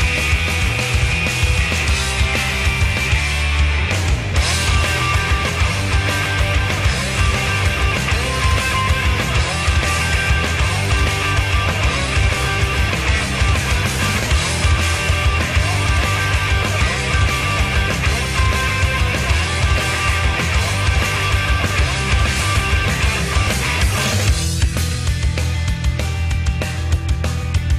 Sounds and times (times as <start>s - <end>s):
Music: 0.0s - 27.7s.